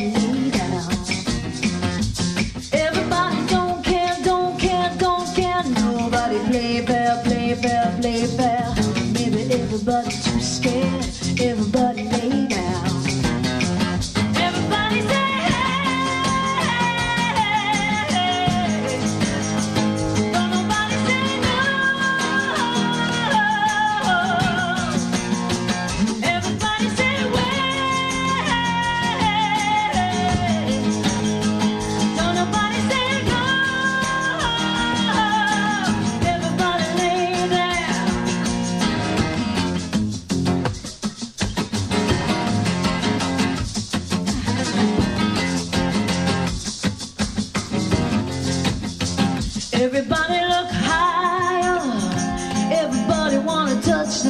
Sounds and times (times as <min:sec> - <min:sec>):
Rattle (instrument): 0:00.0 - 0:54.2.